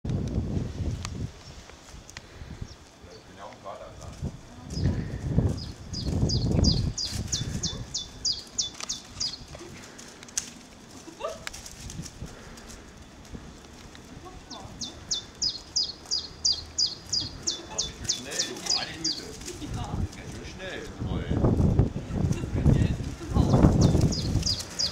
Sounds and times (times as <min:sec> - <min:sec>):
Domestic animals, pets: 0:07.0 - 0:10.1.